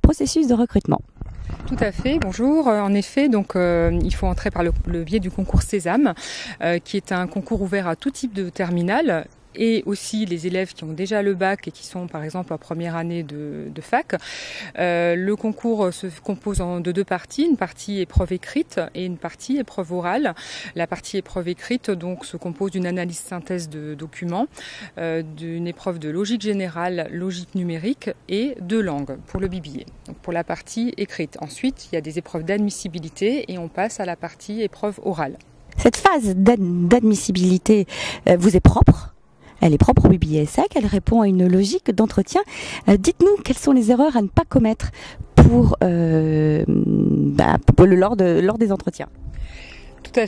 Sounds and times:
Speech: 0.0 - 1.1, 1.7 - 14.2, 14.8 - 49.1, 50.1 - 50.2.

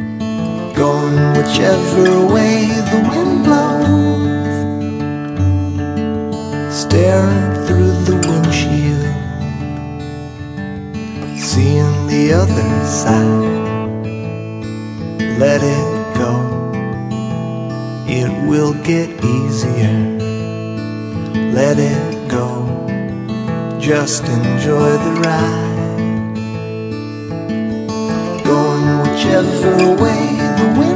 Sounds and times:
Music: 0.0 - 30.9.

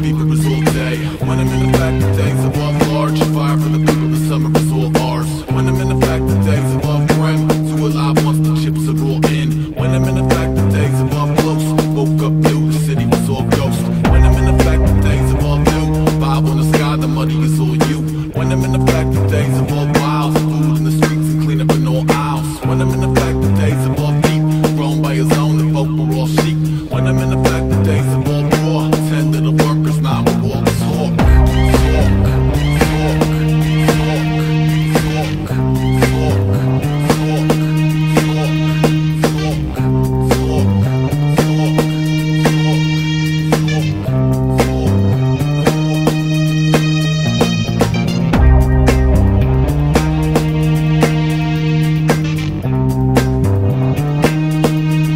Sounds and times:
Music: 0.0 - 55.1.

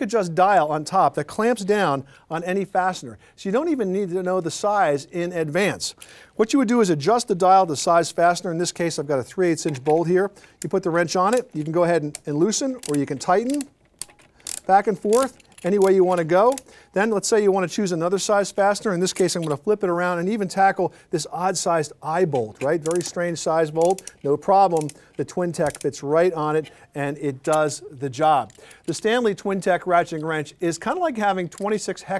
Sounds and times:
Speech: 0.0 - 13.7, 14.7 - 32.1.

